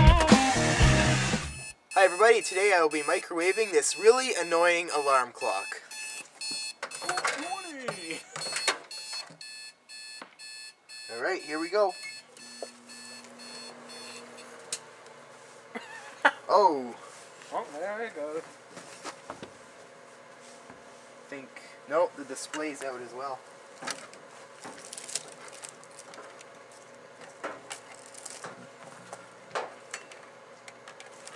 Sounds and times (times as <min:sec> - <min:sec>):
Speech: 0:02.0 - 0:05.8, 0:11.1 - 0:12.0, 0:16.5 - 0:18.5, 0:21.3 - 0:23.4
Microwave oven: 0:03.5 - 0:31.3.